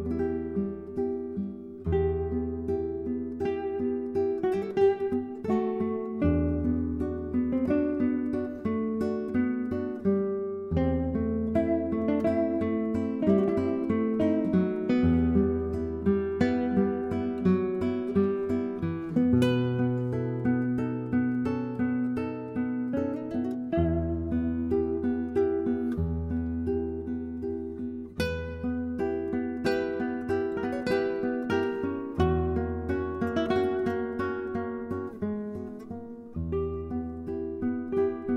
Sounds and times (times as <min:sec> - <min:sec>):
Acoustic guitar: 0:00.0 - 0:38.3.